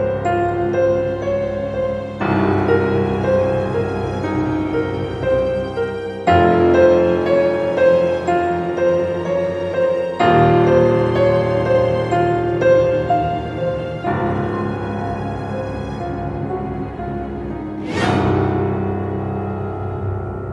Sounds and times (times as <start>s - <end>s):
Scary music: 0.0s - 20.5s.